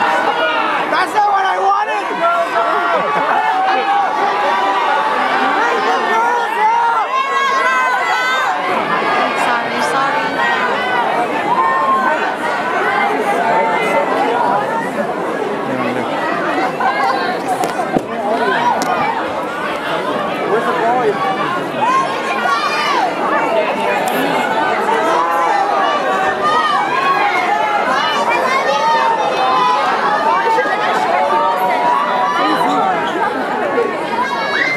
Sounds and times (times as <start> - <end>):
Speech: 0.0 - 34.7.